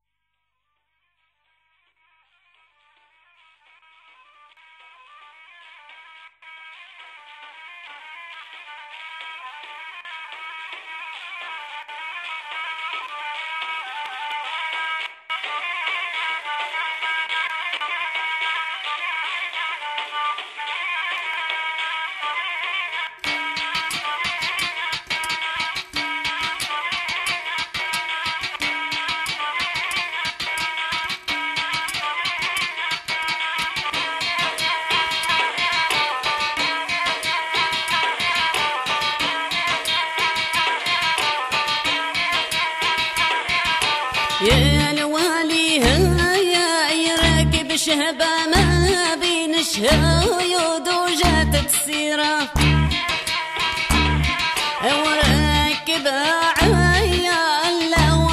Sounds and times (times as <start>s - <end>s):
Music: 0.4s - 58.3s.